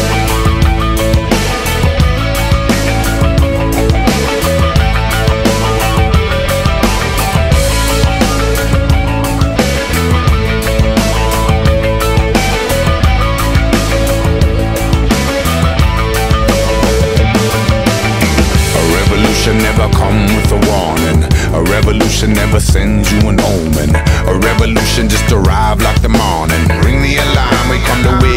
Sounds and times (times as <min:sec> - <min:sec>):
Grunge: 0:00.0 - 0:28.3.